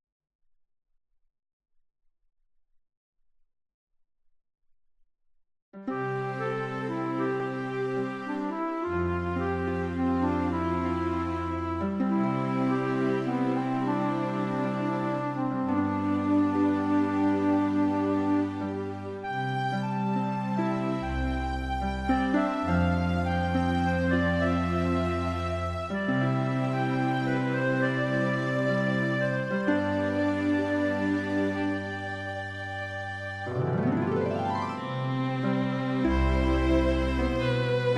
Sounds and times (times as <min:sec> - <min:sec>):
Electronic organ: 0:05.8 - 0:37.9
Piano: 0:05.8 - 0:37.9.